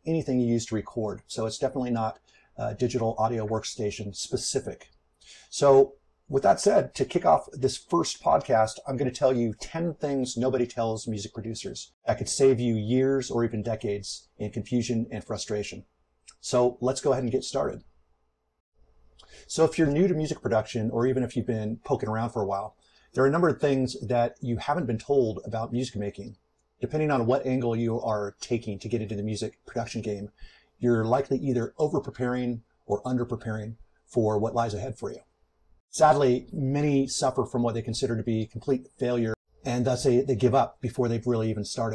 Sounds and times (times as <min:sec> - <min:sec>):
Speech: 0:00.0 - 0:17.8, 0:19.2 - 0:35.2, 0:35.9 - 0:41.9.